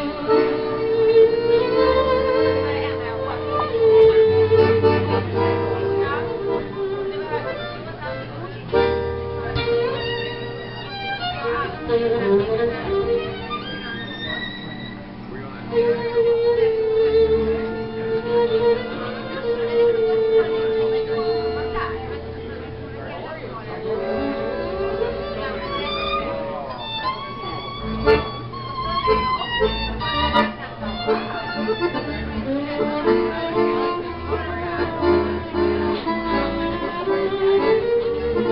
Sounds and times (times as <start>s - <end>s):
Violin, fiddle: 0.0s - 38.5s
Speech: 0.4s - 38.5s.